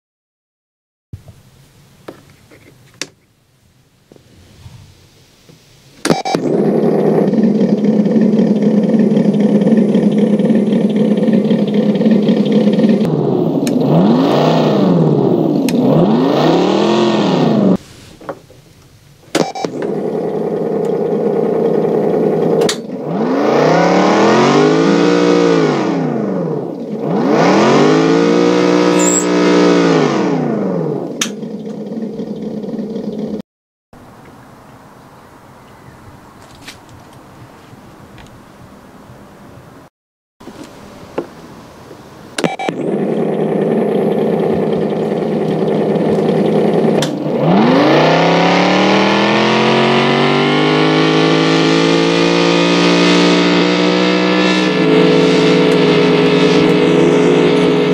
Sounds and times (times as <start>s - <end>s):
Medium engine (mid frequency): 5.8s - 33.4s, 34.0s - 57.9s.